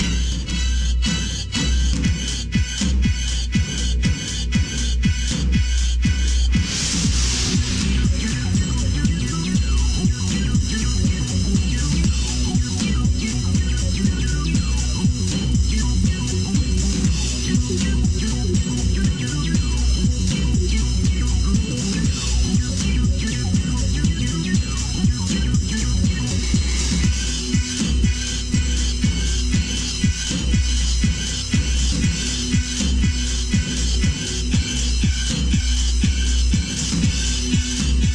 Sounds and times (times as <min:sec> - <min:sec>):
Video game music: 0:05.1 - 0:38.1.